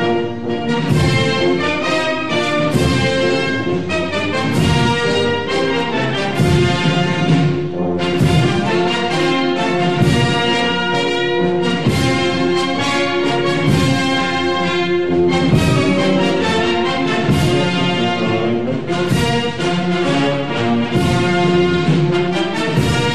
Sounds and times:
Music: 0.0s - 23.1s.

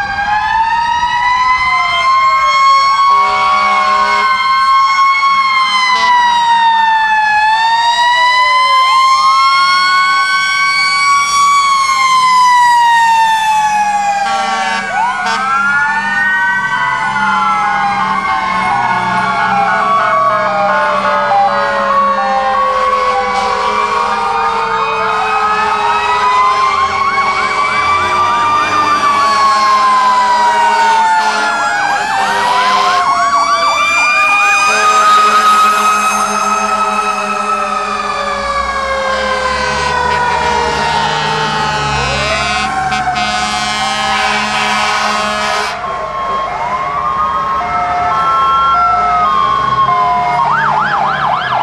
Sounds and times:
Vehicle: 0.0s - 51.6s.

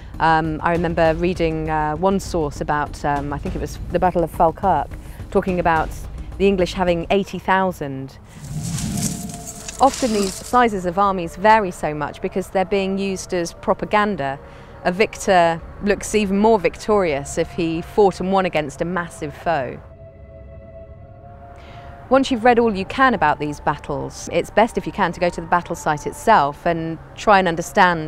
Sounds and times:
Speech: 0.2s - 8.2s, 9.8s - 19.8s, 22.1s - 28.0s.

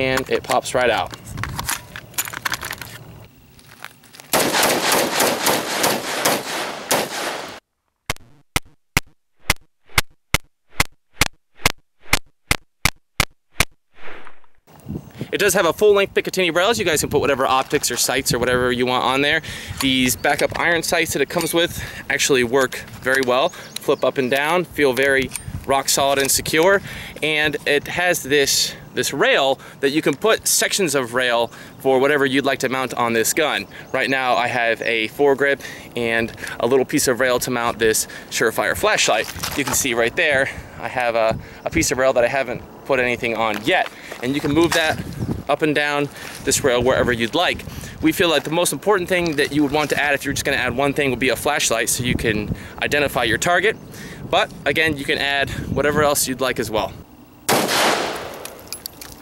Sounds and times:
Speech: 0.0s - 1.1s, 15.3s - 57.0s
Outside, rural or natural: 0.0s - 59.2s.

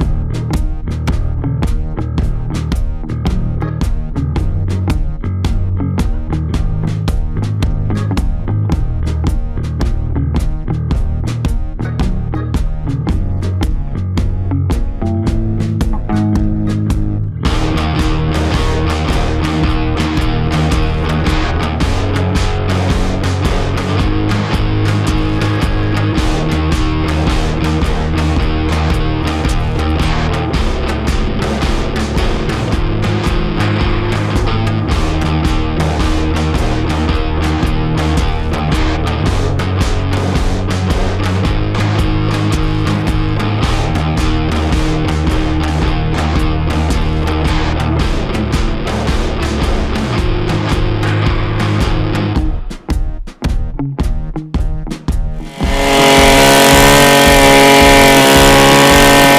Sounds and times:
Music: 0.0s - 59.3s.

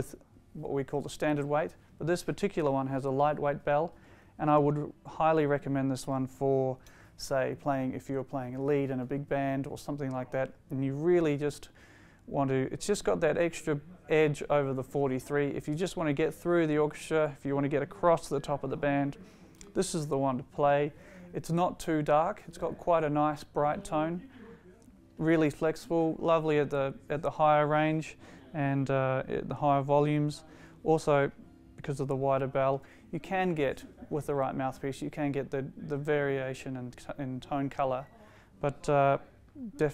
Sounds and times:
Speech: 0.0s - 39.9s.

